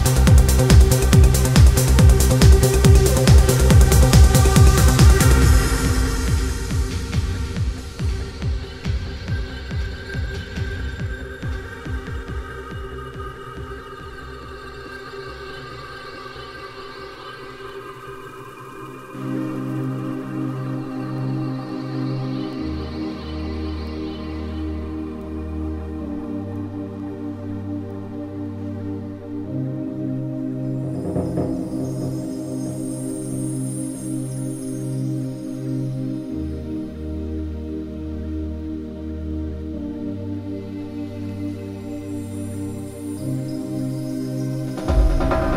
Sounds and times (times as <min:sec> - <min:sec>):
Trance music: 0:00.0 - 0:45.5.